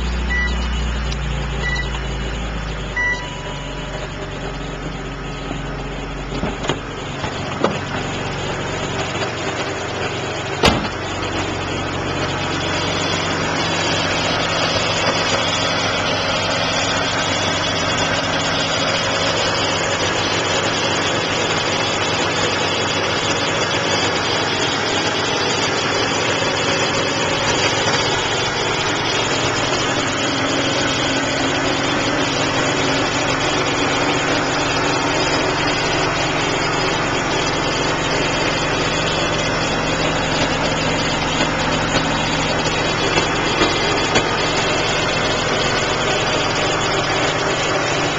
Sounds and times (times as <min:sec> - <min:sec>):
Car: 0:00.0 - 0:48.1
Idling: 0:00.0 - 0:48.1.